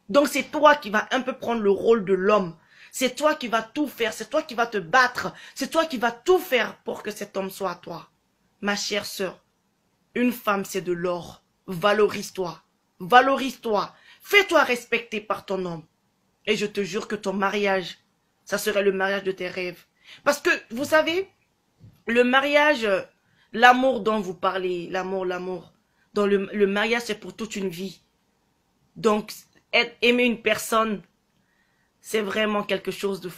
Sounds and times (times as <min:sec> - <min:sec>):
Speech: 0:00.1 - 0:09.4, 0:10.2 - 0:15.9, 0:16.5 - 0:21.4, 0:22.0 - 0:28.1, 0:29.0 - 0:31.1, 0:32.0 - 0:33.3.